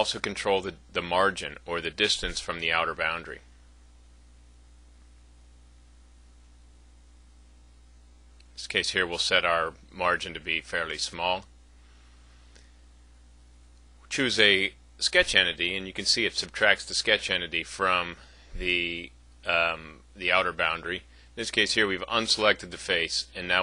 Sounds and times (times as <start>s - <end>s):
Speech: 0.0s - 3.5s, 8.6s - 11.5s, 14.1s - 23.6s.